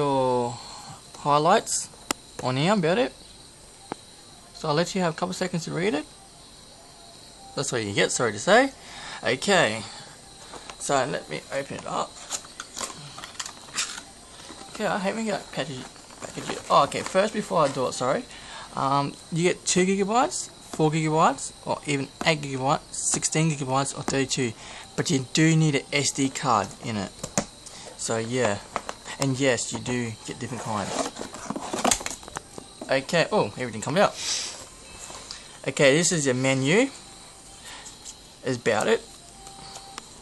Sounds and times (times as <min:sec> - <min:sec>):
Speech: 0:00.0 - 0:03.2, 0:04.4 - 0:06.2, 0:07.6 - 0:10.0, 0:10.8 - 0:12.2, 0:14.7 - 0:27.1, 0:28.0 - 0:31.1, 0:32.8 - 0:34.2, 0:35.6 - 0:37.0, 0:38.4 - 0:39.1.